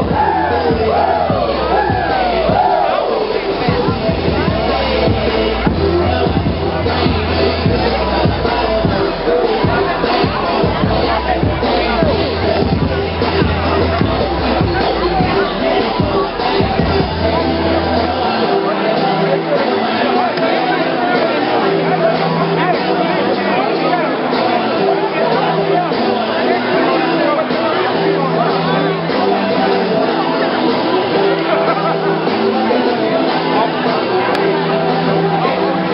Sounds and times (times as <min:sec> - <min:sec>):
Crowd: 0:00.0 - 0:35.9
Music: 0:00.0 - 0:35.9
Speech: 0:00.0 - 0:35.9.